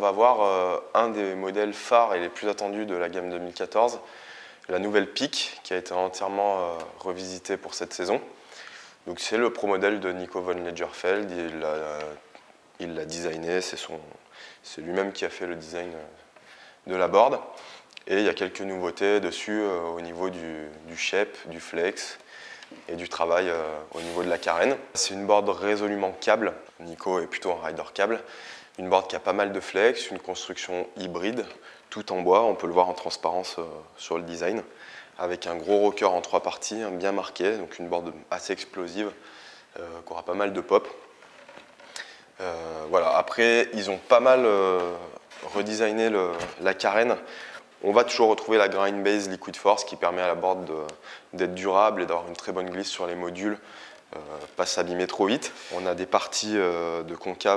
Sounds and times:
Speech: 0.0s - 8.4s, 9.0s - 41.0s, 42.4s - 57.5s.

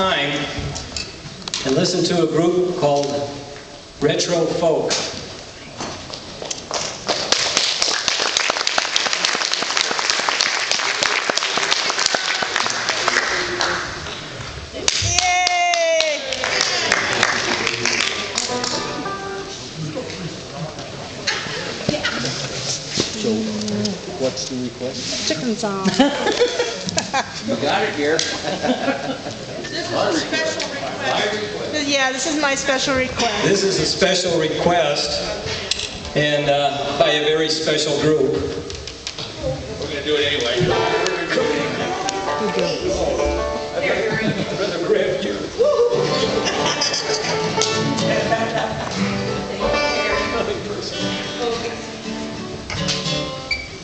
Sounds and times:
Music: 18.0s - 19.7s, 40.6s - 44.2s, 45.9s - 53.8s.

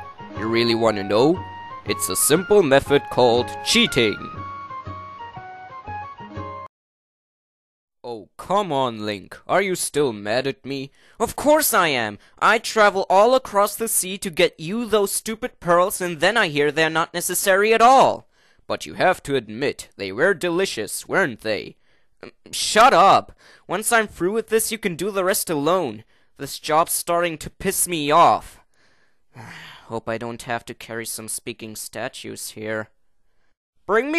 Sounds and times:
Speech: 0.4s - 4.4s, 8.1s - 28.6s, 29.8s - 33.0s, 33.9s - 34.1s.

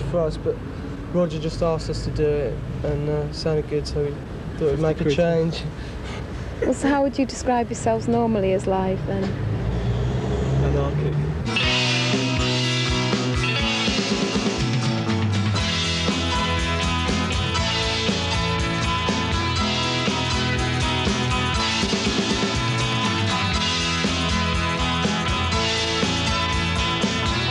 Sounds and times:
Musical instrument: 11.5s - 27.5s.

